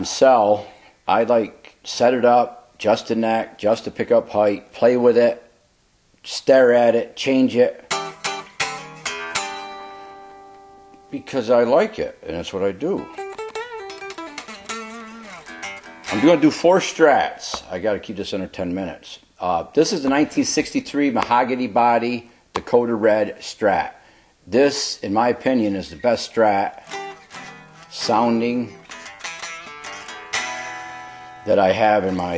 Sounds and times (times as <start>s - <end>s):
Speech: 0.0s - 5.5s, 6.2s - 7.9s, 11.1s - 13.1s, 16.1s - 26.8s, 27.9s - 28.8s, 31.5s - 32.3s
Music: 7.9s - 11.2s, 12.9s - 16.6s, 26.8s - 31.5s.